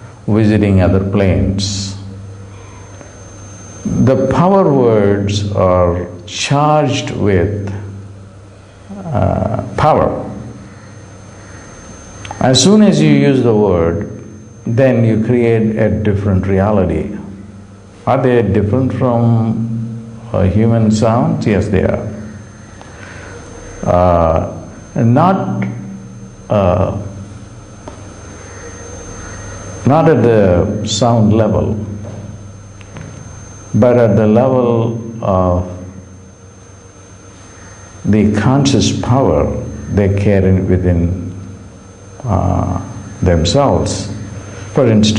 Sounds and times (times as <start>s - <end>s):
Speech: 0.3s - 2.1s, 3.9s - 7.9s, 8.9s - 10.5s, 12.4s - 17.4s, 18.1s - 22.3s, 23.8s - 25.8s, 26.5s - 27.2s, 29.8s - 32.0s, 33.8s - 35.9s, 38.1s - 41.3s, 42.2s - 44.2s, 44.8s - 45.1s.